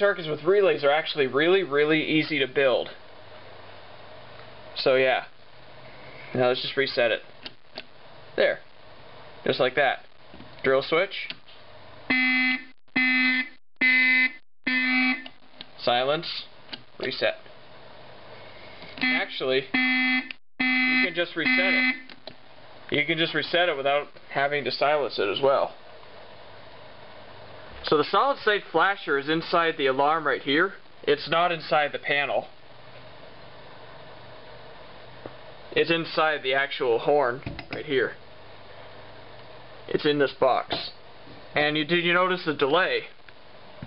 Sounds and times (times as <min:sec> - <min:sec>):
Speech: 0:00.0 - 0:03.0, 0:04.8 - 0:05.4, 0:06.3 - 0:07.3, 0:08.4 - 0:08.7, 0:09.4 - 0:11.4, 0:15.8 - 0:17.5, 0:19.0 - 0:19.8, 0:21.0 - 0:22.0, 0:22.9 - 0:25.8, 0:27.8 - 0:32.6, 0:35.7 - 0:38.2, 0:39.9 - 0:41.0, 0:41.6 - 0:43.2
Fire alarm: 0:12.1 - 0:15.3, 0:19.0 - 0:22.1.